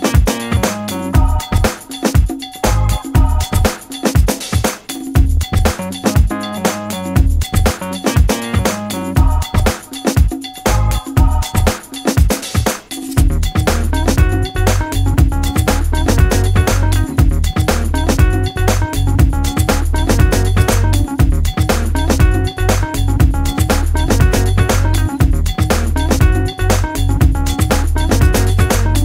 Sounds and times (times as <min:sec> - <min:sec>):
Music: 0:00.0 - 0:29.0.